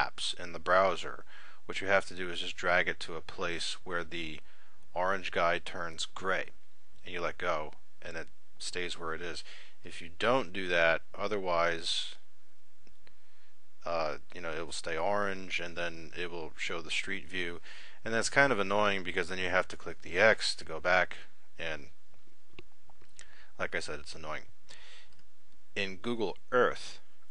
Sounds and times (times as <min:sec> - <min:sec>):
Speech: 0:00.0 - 0:12.2, 0:13.8 - 0:21.9, 0:23.6 - 0:24.5, 0:25.8 - 0:27.0.